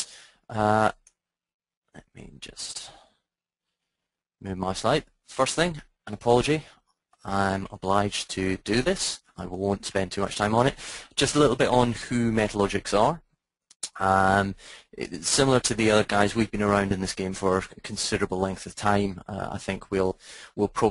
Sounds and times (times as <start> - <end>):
Speech: 0.5 - 1.0, 1.9 - 3.1, 4.4 - 13.2, 13.8 - 20.9.